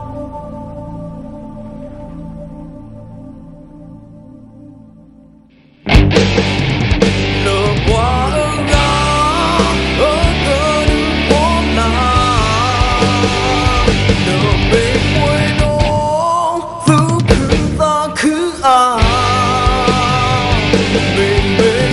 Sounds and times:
Music: 0:00.0 - 0:21.9.

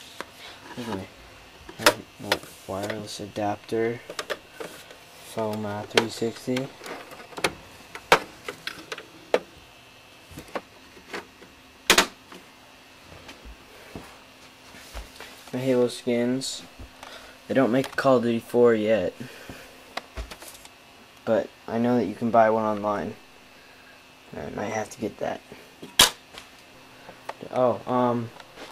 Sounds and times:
Speech: 0:00.8 - 0:01.1, 0:01.8 - 0:04.1, 0:05.3 - 0:06.7, 0:15.5 - 0:16.7, 0:17.5 - 0:19.3, 0:21.2 - 0:23.2, 0:24.3 - 0:25.6, 0:27.4 - 0:28.4.

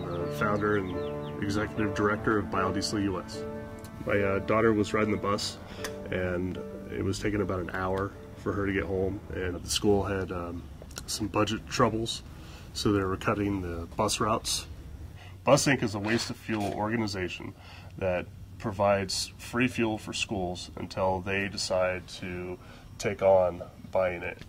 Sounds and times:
Speech: 0:00.0 - 0:03.4, 0:04.1 - 0:12.2, 0:12.8 - 0:14.7, 0:15.4 - 0:24.4.

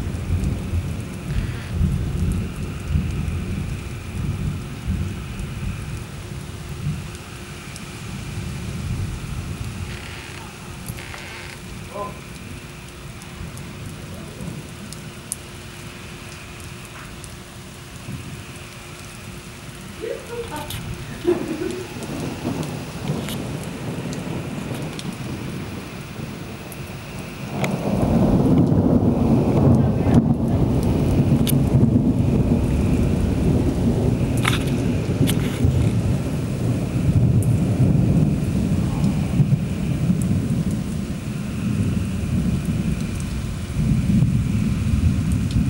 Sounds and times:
Raindrop: 0:00.0 - 0:45.6
Thunder: 0:20.9 - 0:45.6.

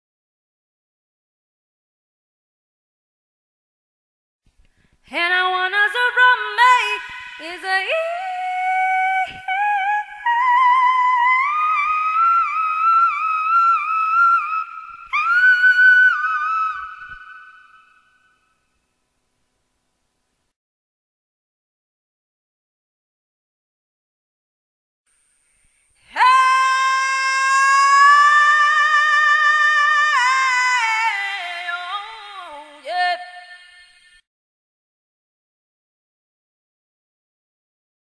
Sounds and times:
Female singing: 0:05.1 - 0:17.3, 0:26.1 - 0:34.0.

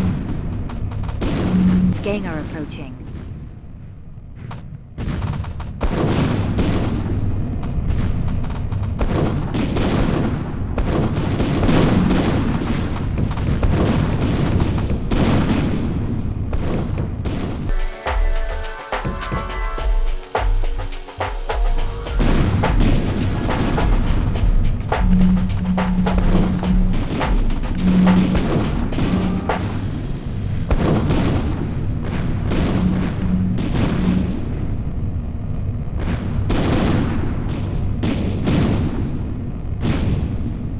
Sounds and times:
Boom: 0:04.4 - 0:07.3, 0:07.9 - 0:34.8, 0:36.0 - 0:40.6
Music: 0:17.7 - 0:30.0.

